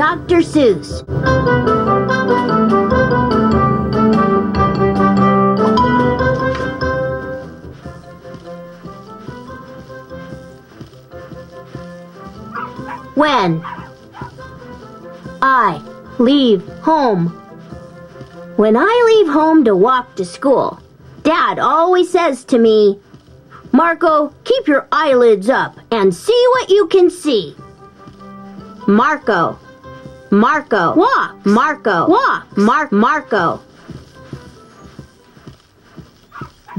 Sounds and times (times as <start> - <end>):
Keyboard (musical): 0.1 - 18.9.